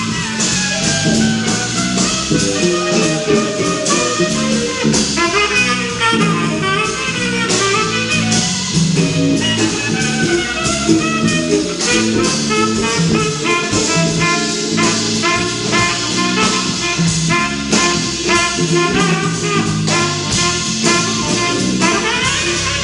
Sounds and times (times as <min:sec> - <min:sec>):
Brass instrument: 0:00.0 - 0:22.8
Guitar: 0:00.0 - 0:22.8
Jazz: 0:00.0 - 0:22.8
Saxophone: 0:00.0 - 0:22.8.